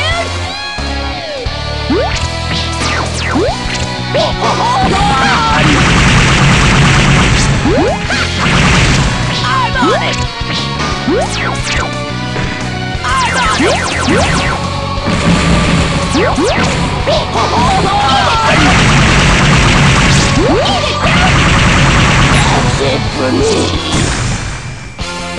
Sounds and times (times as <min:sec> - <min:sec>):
Music: 0:00.0 - 0:25.3
Speech: 0:22.4 - 0:23.9.